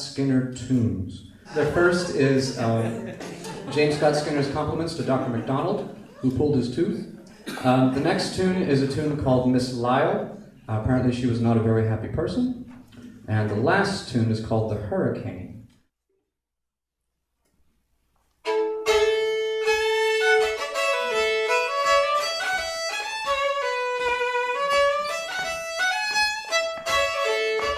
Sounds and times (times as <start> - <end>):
Speech: 0.0 - 12.7, 13.3 - 15.6
Violin, fiddle: 18.4 - 27.7.